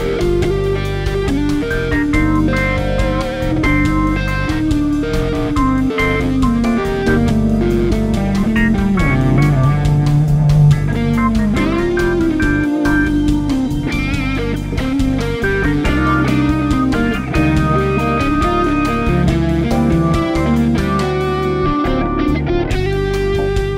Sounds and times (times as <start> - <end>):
Strum: 0.0 - 23.7
Acoustic guitar: 1.9 - 22.9.